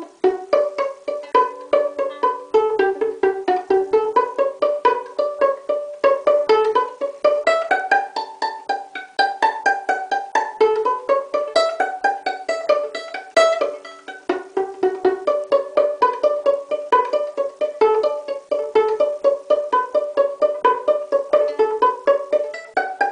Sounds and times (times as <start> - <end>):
Pizzicato: 0.0 - 23.1.